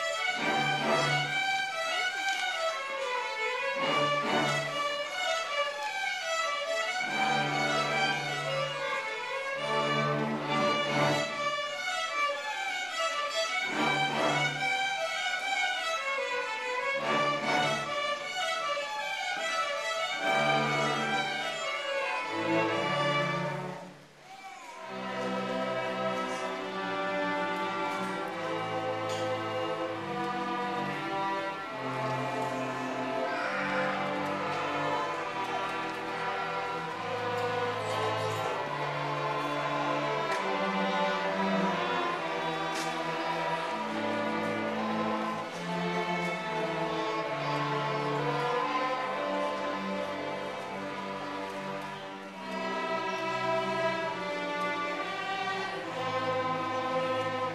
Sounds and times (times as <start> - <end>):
Orchestra: 0.0 - 57.5.